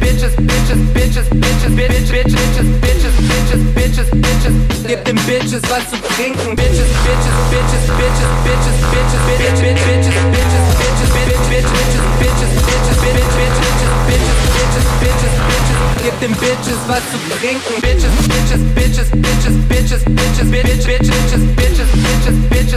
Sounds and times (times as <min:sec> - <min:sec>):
Electronic music: 0:04.3 - 0:22.7.